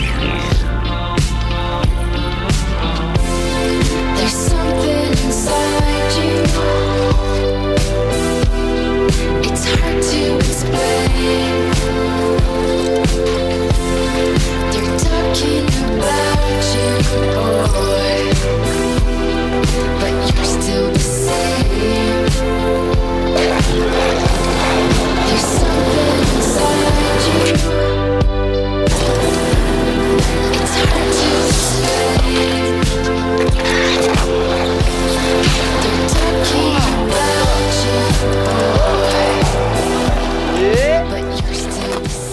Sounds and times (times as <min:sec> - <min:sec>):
Skateboard: 0:23.2 - 0:27.8, 0:28.9 - 0:42.3.